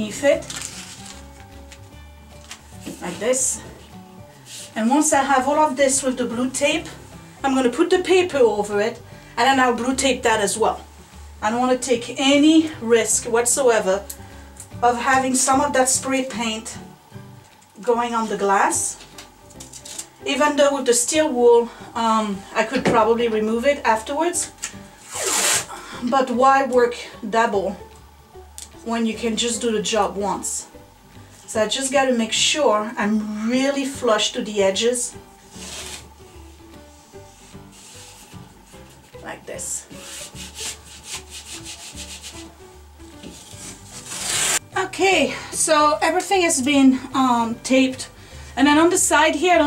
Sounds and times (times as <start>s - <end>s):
Speech: 0.0s - 0.5s, 3.0s - 3.7s, 4.8s - 10.8s, 11.4s - 14.0s, 14.8s - 16.8s, 17.8s - 19.0s, 20.3s - 24.5s, 26.0s - 27.8s, 28.8s - 30.7s, 31.5s - 35.2s, 39.2s - 39.9s, 44.8s - 49.6s
Music: 0.0s - 49.6s.